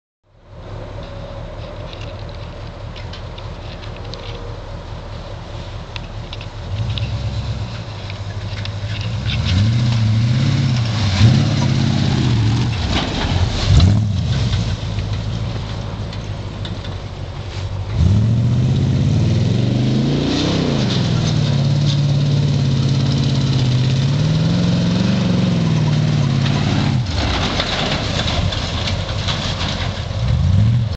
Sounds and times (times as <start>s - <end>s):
Vehicle: 0.2s - 30.9s.